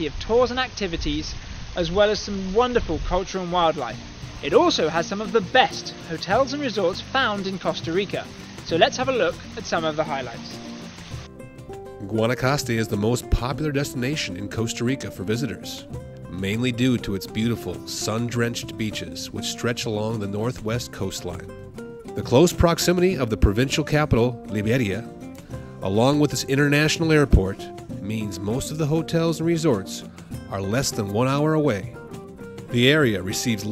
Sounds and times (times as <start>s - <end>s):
Speech: 0.0s - 10.6s, 12.0s - 21.5s, 22.2s - 25.1s, 25.8s - 32.0s, 32.7s - 33.7s
Music: 3.2s - 33.7s.